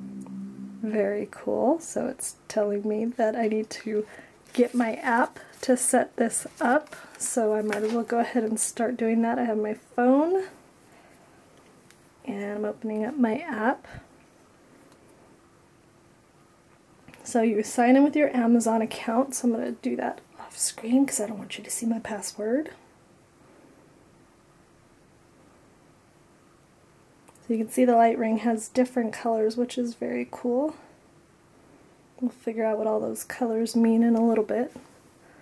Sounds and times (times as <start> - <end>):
Speech: 0.8 - 10.6, 12.3 - 14.1, 17.2 - 22.8, 27.4 - 30.9, 32.2 - 34.8.